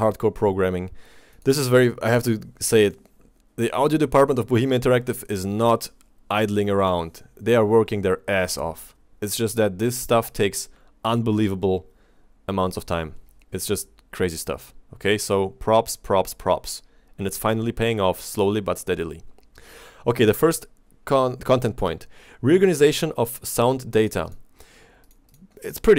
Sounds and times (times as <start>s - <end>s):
Speech: 0.0s - 11.9s, 12.5s - 19.3s, 20.0s - 24.4s, 25.5s - 25.9s.